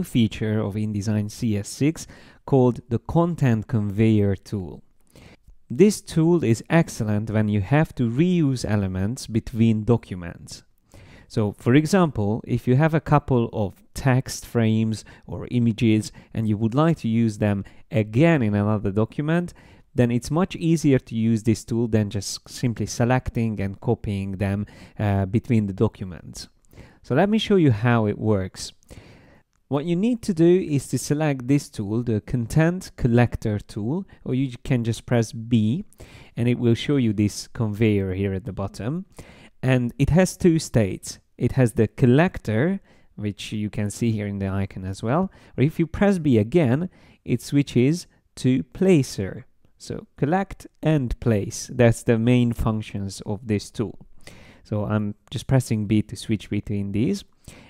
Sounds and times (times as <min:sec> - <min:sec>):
Speech: 0:00.0 - 0:04.8, 0:05.7 - 0:10.7, 0:11.3 - 0:28.8, 0:29.7 - 0:54.0, 0:54.6 - 0:57.3.